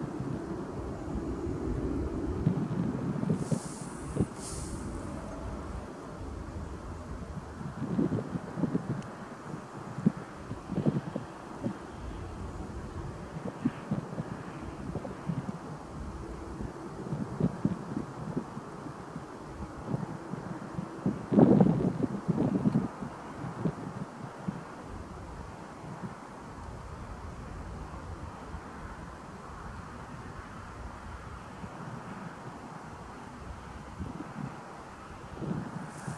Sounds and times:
Vehicle: 0.0s - 36.1s
Wind: 0.0s - 36.1s.

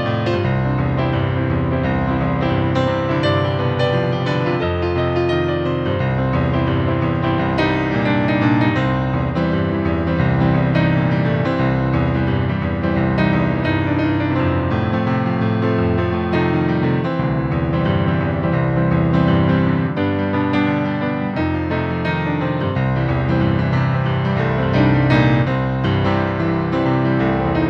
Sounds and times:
Music: 0.0s - 27.6s.

